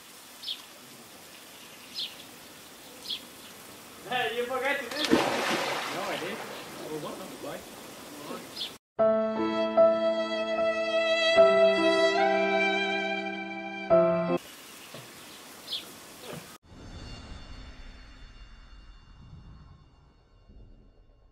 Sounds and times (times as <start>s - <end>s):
Environmental noise: 0.0s - 8.8s, 14.4s - 16.6s
Music: 9.0s - 14.4s, 16.6s - 21.3s.